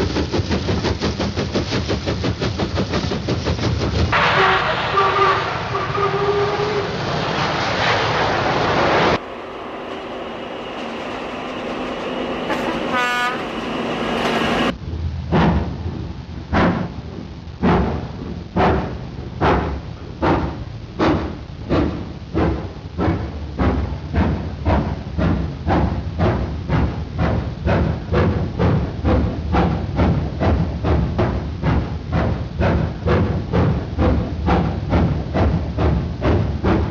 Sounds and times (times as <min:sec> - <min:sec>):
Train: 0:00.0 - 0:36.9.